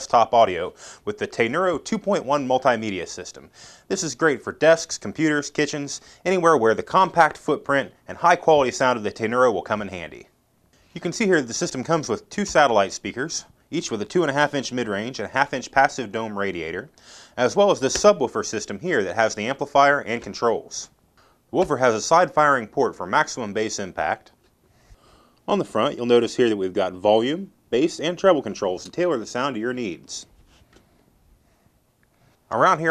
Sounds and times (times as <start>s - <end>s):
Speech: 0.0s - 10.4s, 11.0s - 24.4s, 25.5s - 30.4s, 32.5s - 32.9s.